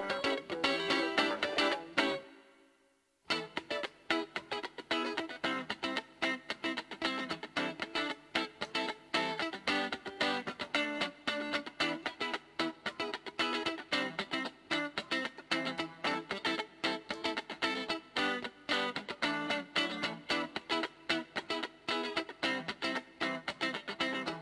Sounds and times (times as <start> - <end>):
Electric guitar: 0.0 - 2.5, 3.3 - 24.4.